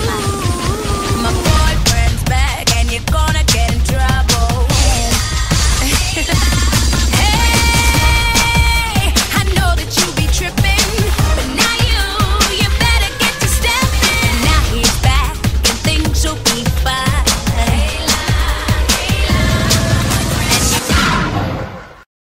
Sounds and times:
Exciting music: 0.0s - 22.0s.

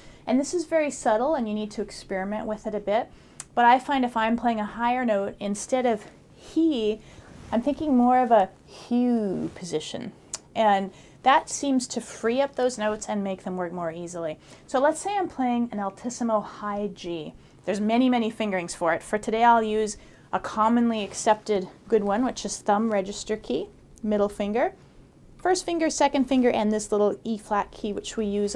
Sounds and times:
Speech: 0.3s - 24.8s, 25.4s - 28.5s.

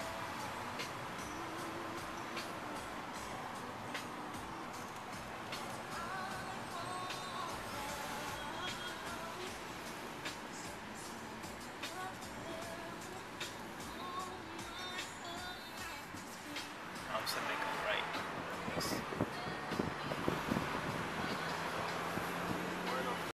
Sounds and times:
Car passing by: 0.0s - 23.3s
Music: 0.0s - 23.3s
Speech: 17.1s - 19.0s.

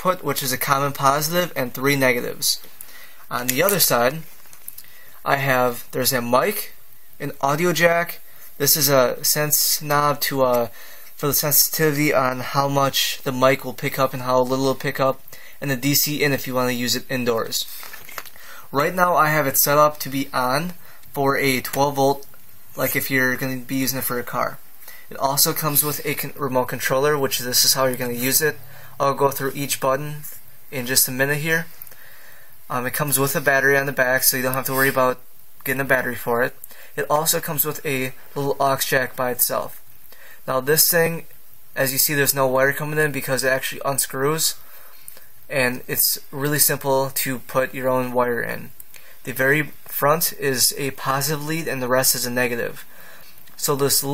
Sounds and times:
Speech: 0.0s - 2.6s, 3.3s - 4.3s, 5.2s - 17.8s, 18.7s - 31.7s, 32.7s - 39.8s, 40.5s - 44.6s, 45.5s - 52.9s, 53.6s - 54.1s.

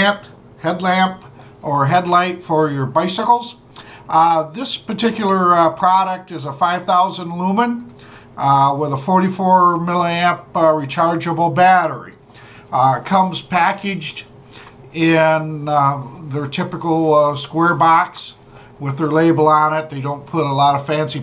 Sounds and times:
Speech: 0.0s - 14.3s, 15.0s - 21.2s.

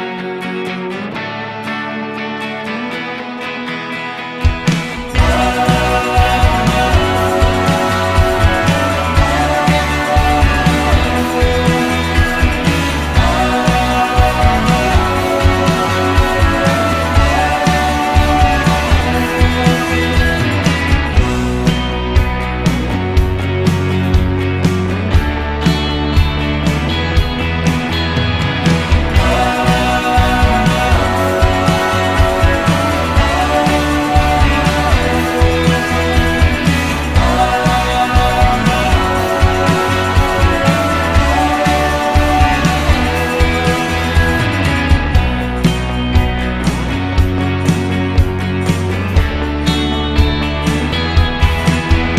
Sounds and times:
Music: 0.0s - 52.1s.

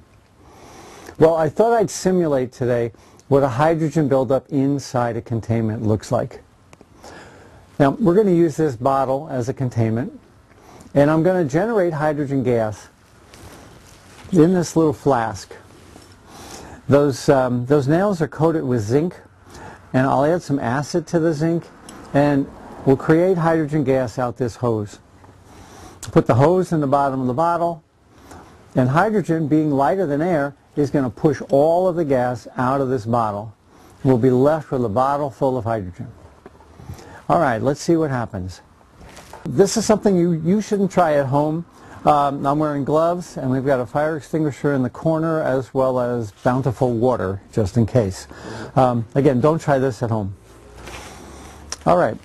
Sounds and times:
Speech: 1.2s - 6.5s, 7.8s - 10.2s, 10.9s - 13.0s, 14.3s - 15.7s, 16.9s - 19.3s, 19.9s - 25.0s, 26.0s - 27.8s, 28.8s - 36.2s, 37.3s - 38.7s, 39.5s - 50.4s, 51.8s - 52.2s.

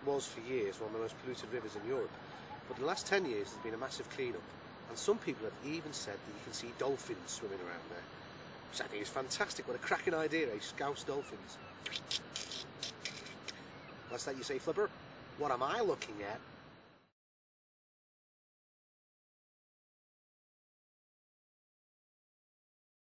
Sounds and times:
Speech: 0.0s - 2.1s, 2.7s - 8.1s, 8.7s - 11.6s, 14.1s - 16.4s.

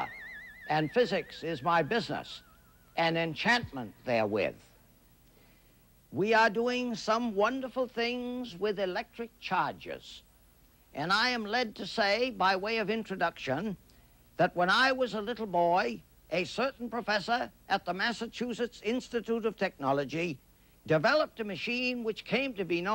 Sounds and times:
Speech: 0.7s - 2.4s, 3.0s - 4.8s, 6.1s - 10.3s, 11.0s - 13.8s, 14.4s - 22.9s.

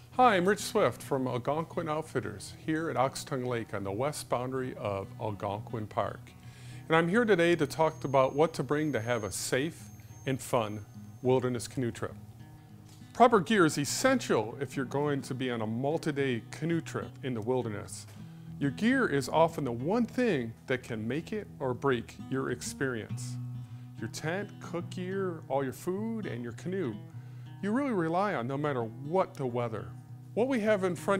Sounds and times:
Music: 0.0s - 31.1s
Speech: 0.2s - 6.3s, 6.9s - 12.2s, 13.2s - 23.4s, 24.0s - 27.0s, 27.6s - 31.1s.

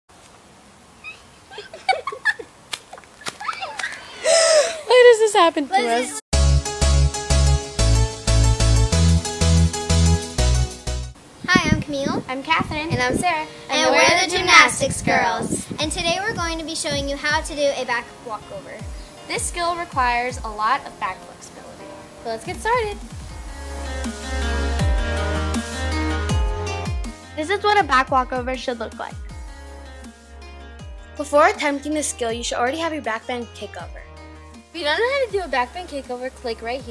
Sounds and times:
Outside, rural or natural: 0.1s - 27.8s
Music: 6.3s - 11.2s, 12.8s - 36.9s.

